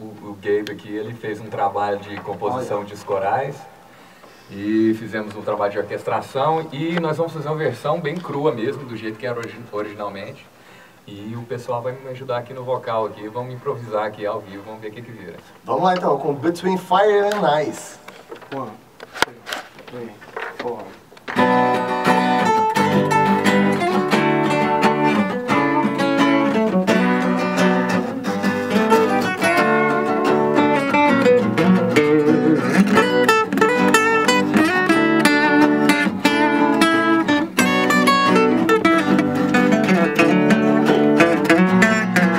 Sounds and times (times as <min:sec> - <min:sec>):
Speech: 0:00.0 - 0:03.7, 0:04.5 - 0:10.5, 0:11.1 - 0:21.0
Music: 0:21.3 - 0:42.3.